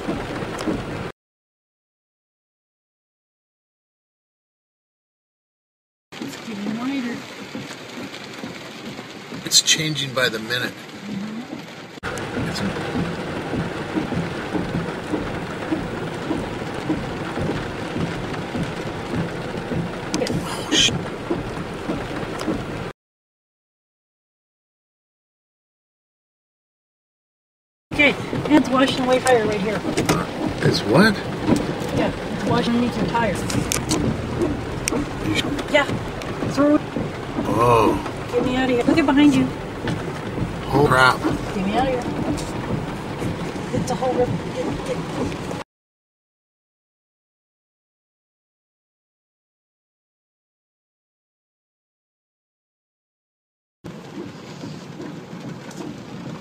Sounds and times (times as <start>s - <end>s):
Speech: 9.4s - 11.6s, 12.4s - 12.8s, 20.2s - 20.9s, 28.0s - 31.3s, 31.9s - 33.6s, 35.2s - 36.8s, 37.5s - 39.6s, 40.6s - 42.2s, 43.8s - 45.1s.